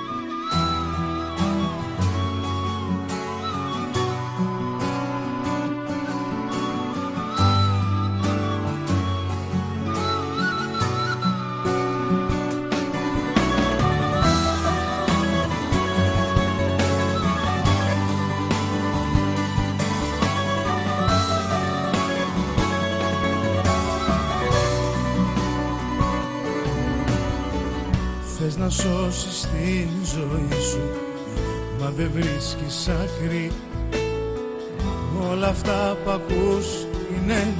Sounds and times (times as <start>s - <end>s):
Background music: 0.0s - 37.5s.